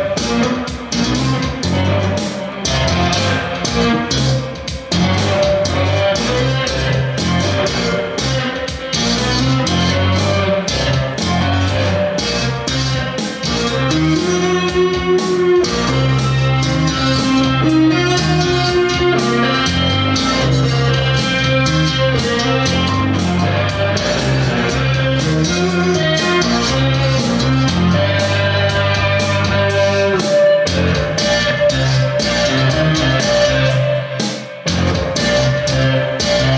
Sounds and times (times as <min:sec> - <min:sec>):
Bass guitar: 0:00.0 - 0:36.5.